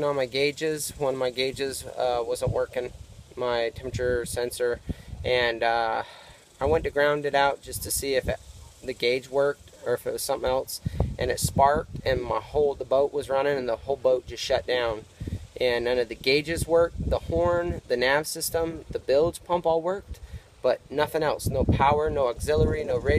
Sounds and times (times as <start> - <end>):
Speech: 0.0 - 23.1.